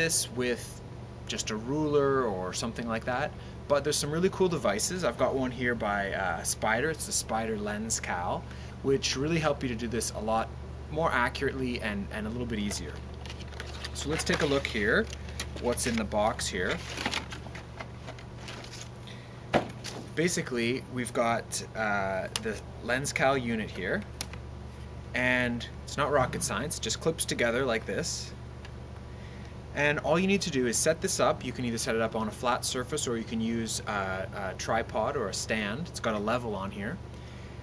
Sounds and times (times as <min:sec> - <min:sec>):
Speech: 0:00.0 - 0:13.0, 0:14.0 - 0:17.0, 0:20.2 - 0:24.1, 0:25.2 - 0:28.4, 0:29.8 - 0:37.0.